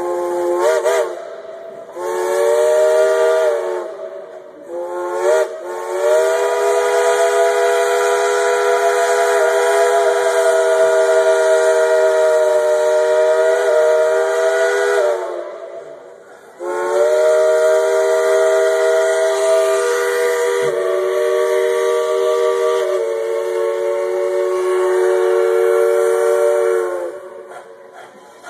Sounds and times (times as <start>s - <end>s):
Steam whistle: 0.0s - 28.4s.